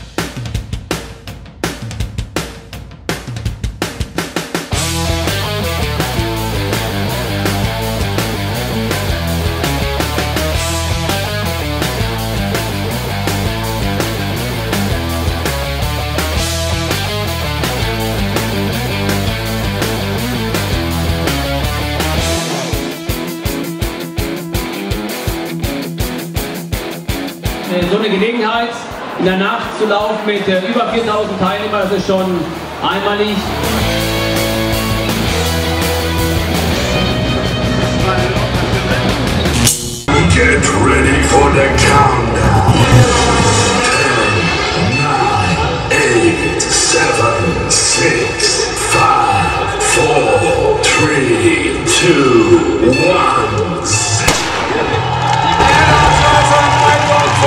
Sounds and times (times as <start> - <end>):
Music: 0.0 - 57.4.